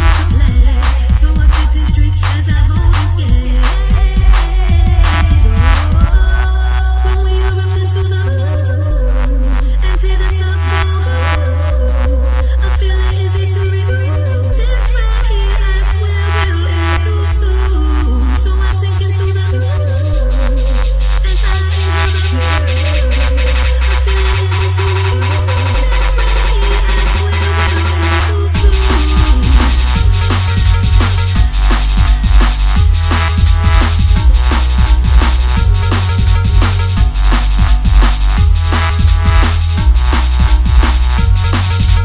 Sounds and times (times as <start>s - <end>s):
Drum kit: 0.0s - 10.0s, 20.2s - 42.0s
Drum: 0.0s - 10.3s, 20.2s - 42.0s.